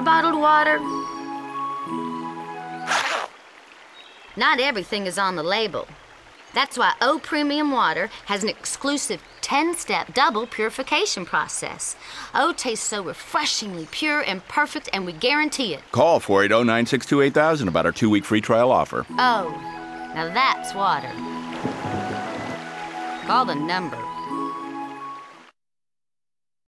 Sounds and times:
Speech: 0.0s - 0.8s, 4.4s - 6.0s, 6.6s - 19.6s, 20.2s - 21.1s, 23.3s - 24.0s
Music: 0.0s - 3.0s, 19.1s - 25.5s
Stream: 0.0s - 25.6s.

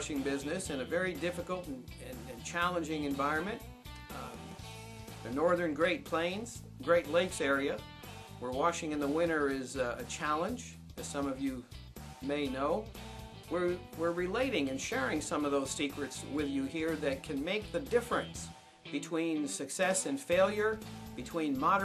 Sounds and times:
Speech: 0.0s - 4.5s, 5.2s - 7.8s, 8.4s - 12.9s, 13.5s - 21.8s
Music: 0.0s - 21.8s.

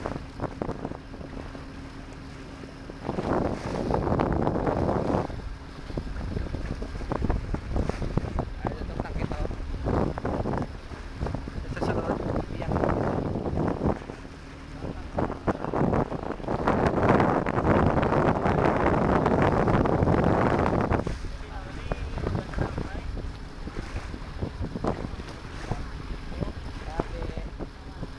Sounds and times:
Rowboat, canoe, kayak: 0.0s - 28.1s
Speech: 8.6s - 9.5s, 11.6s - 12.8s, 21.3s - 23.1s, 25.6s - 28.1s.

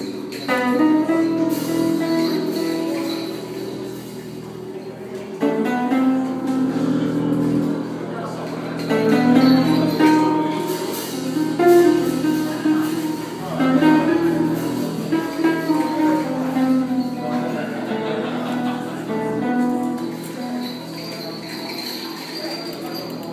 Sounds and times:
Strum: 0.0s - 23.2s
Acoustic guitar: 0.0s - 23.3s
Speech: 1.9s - 23.3s.

